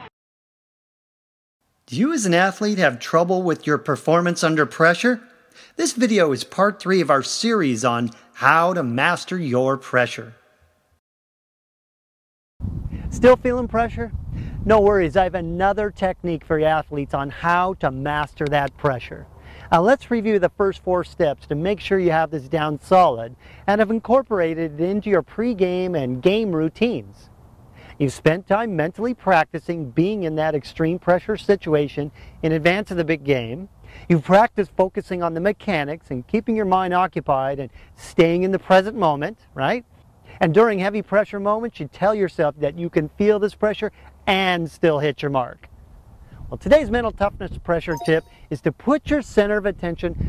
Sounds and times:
Narration, monologue: 1.6s - 11.0s, 12.9s - 50.2s.

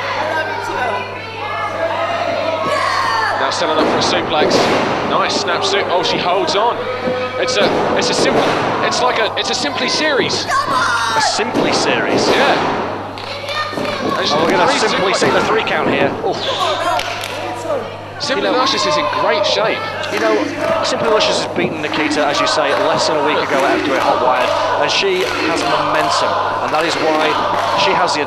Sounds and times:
Speech: 3.4s - 10.5s, 13.4s - 16.7s, 17.4s - 28.2s
Thump, thud: 3.8s - 5.1s.

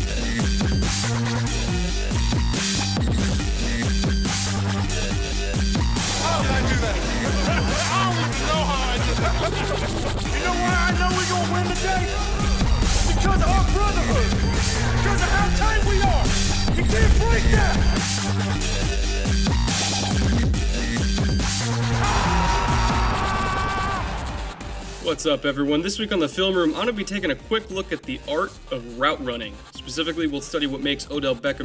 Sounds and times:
Music: 0.0s - 31.6s
Speech: 6.2s - 7.0s, 7.6s - 9.2s, 10.3s - 12.2s, 13.0s - 14.3s, 15.0s - 17.8s, 25.0s - 31.6s.

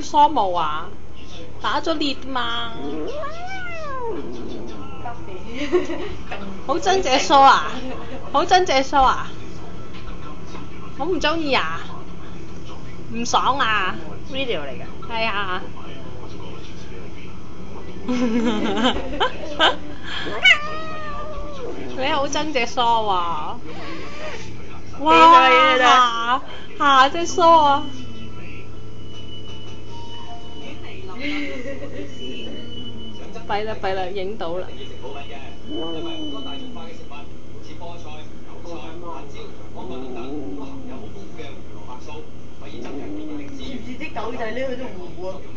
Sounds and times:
Cat: 2.7s - 5.1s, 20.3s - 22.0s, 35.7s - 37.0s, 39.8s - 41.2s, 42.7s - 43.8s
Speech: 21.6s - 28.7s.

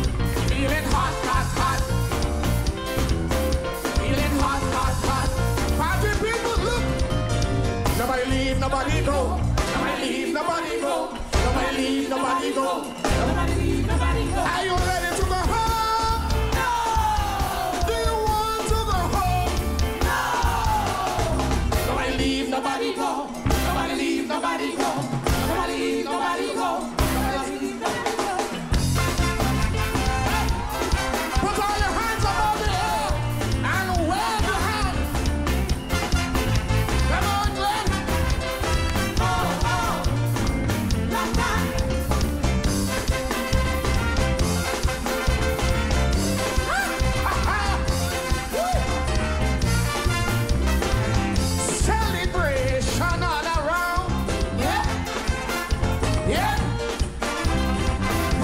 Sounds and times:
Music: 0.0s - 58.4s.

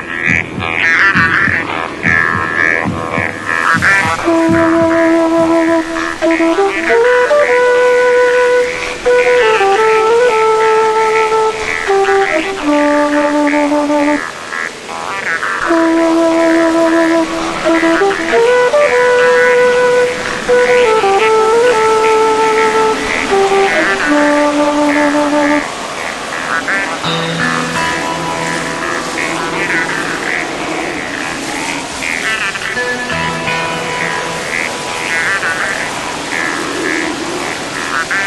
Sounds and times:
Ocean: 0.0s - 38.2s.

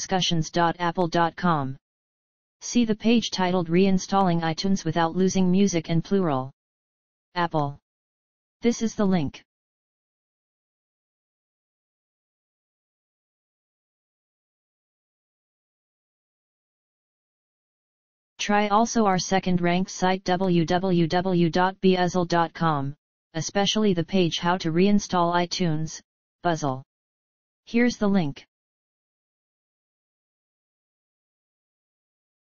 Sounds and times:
Speech: 0.0s - 1.8s, 2.6s - 6.5s, 7.4s - 7.8s, 8.6s - 9.4s, 18.4s - 26.8s, 27.7s - 28.5s.

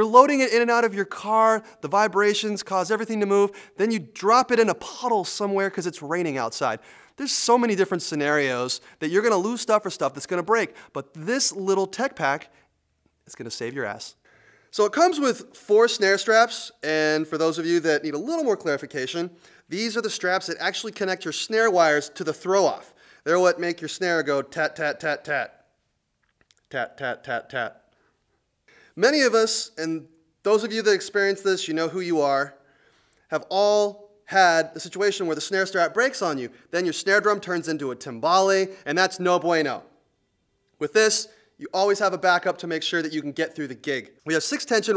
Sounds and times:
Speech: 0.0s - 12.5s, 13.2s - 25.6s, 26.6s - 27.9s, 29.0s - 32.6s, 33.3s - 39.9s, 40.8s - 44.9s.

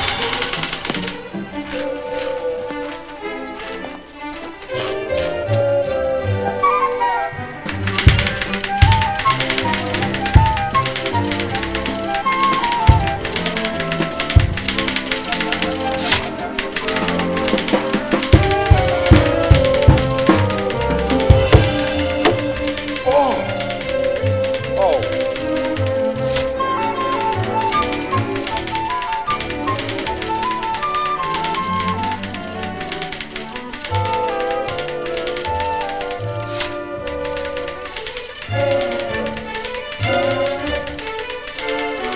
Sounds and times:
Drum kit: 7.7s - 23.9s
Bass drum: 8.0s - 9.2s, 18.4s - 22.5s
Rimshot: 15.6s - 23.1s.

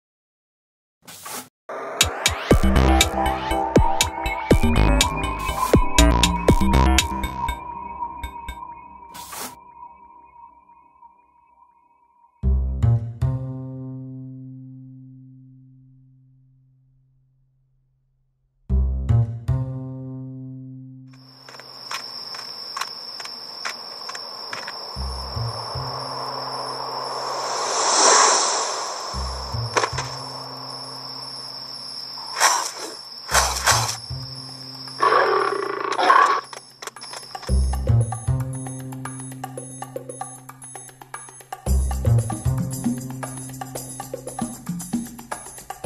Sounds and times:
Music: 2.0s - 17.2s, 18.6s - 21.2s, 29.1s - 31.4s, 33.3s - 35.3s, 36.6s - 45.8s.

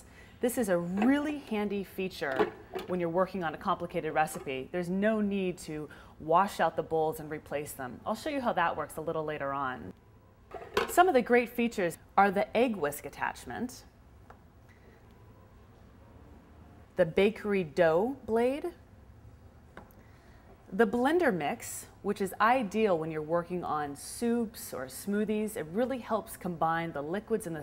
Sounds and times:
Speech: 0.4s - 9.9s.

